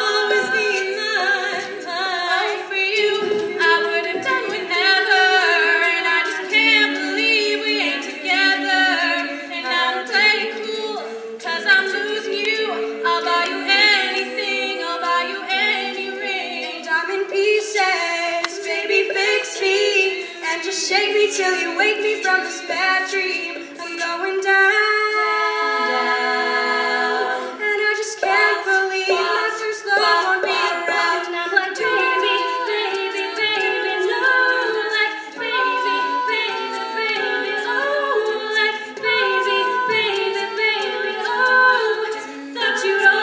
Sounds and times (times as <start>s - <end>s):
A capella: 0.0s - 43.2s
Choir: 0.0s - 43.2s.